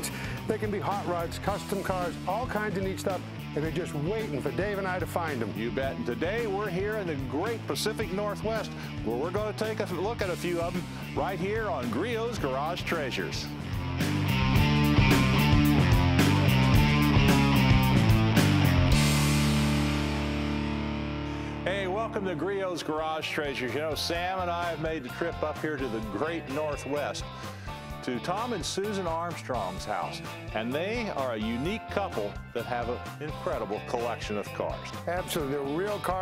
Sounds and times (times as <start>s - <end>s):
Speech: 0.0s - 13.5s, 21.6s - 27.3s, 28.0s - 36.2s
Music: 0.0s - 36.2s.